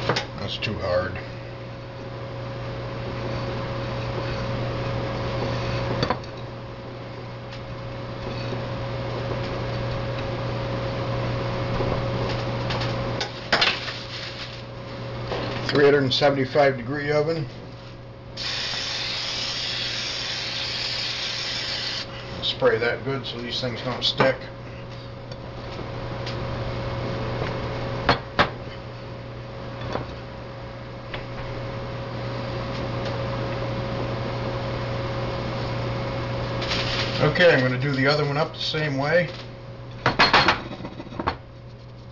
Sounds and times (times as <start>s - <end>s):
Speech: 0.4s - 1.3s, 15.7s - 17.5s, 22.4s - 24.5s, 37.2s - 39.4s.